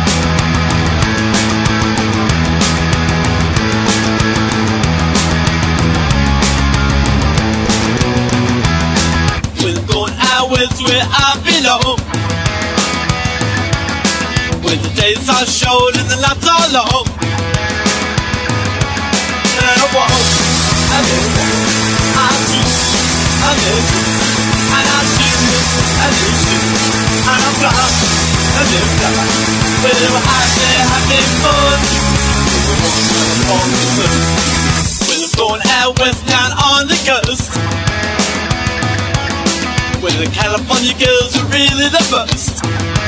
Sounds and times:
Electric guitar: 0:00.0 - 0:43.0.

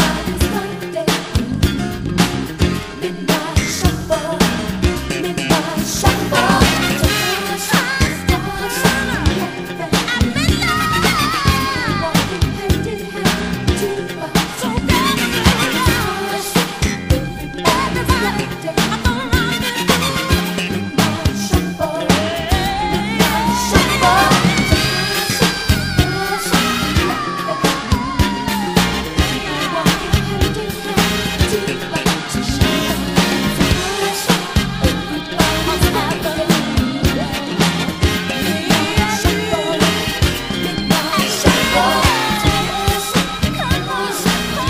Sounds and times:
Funk: 0:00.0 - 0:44.7.

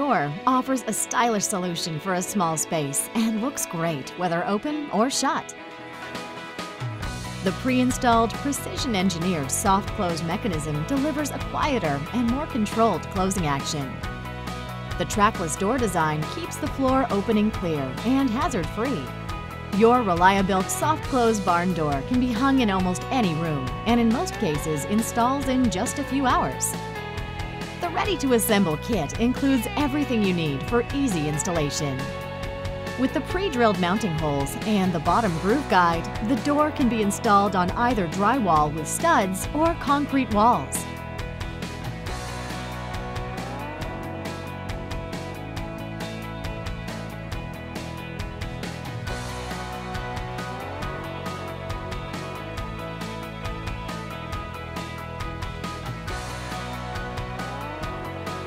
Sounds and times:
Speech: 0:00.0 - 0:05.5, 0:07.5 - 0:14.0, 0:15.0 - 0:19.1, 0:19.8 - 0:26.8, 0:27.8 - 0:32.1, 0:33.0 - 0:40.8
Music: 0:00.0 - 0:58.4.

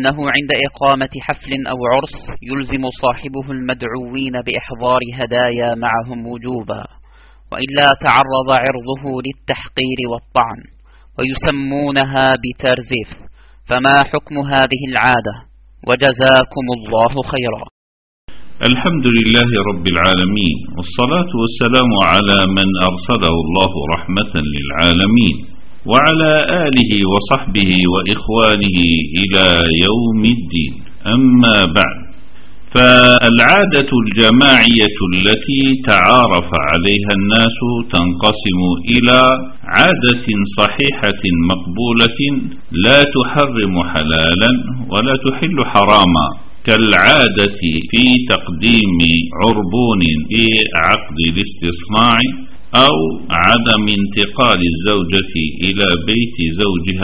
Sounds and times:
Speech: 0:00.0 - 0:06.9, 0:07.5 - 0:17.7, 0:18.6 - 0:32.1, 0:32.7 - 0:57.0.

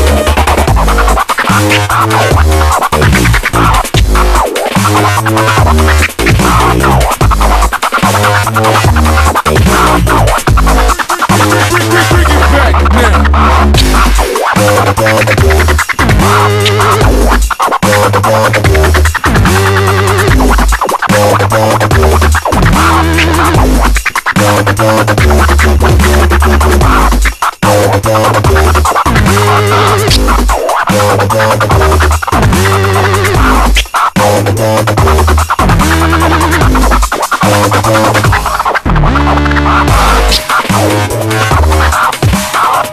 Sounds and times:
Dubstep: 0:00.0 - 0:42.9.

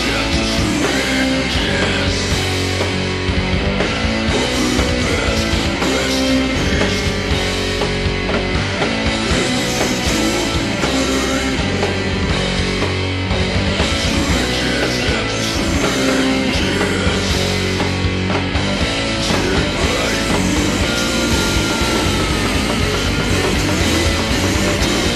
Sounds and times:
Heavy metal: 0:00.0 - 0:25.1
Punk rock: 0:00.0 - 0:25.1.

